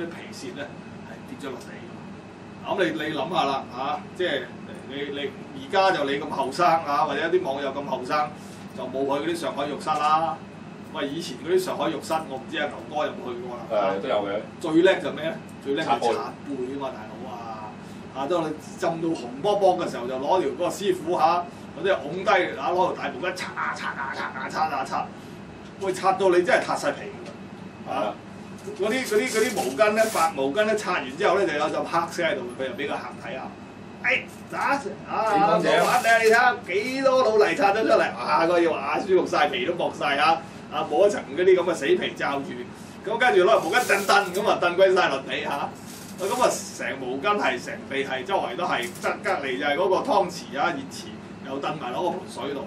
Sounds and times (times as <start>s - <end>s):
Speech: 0.0s - 2.0s, 2.6s - 25.2s, 25.8s - 52.6s.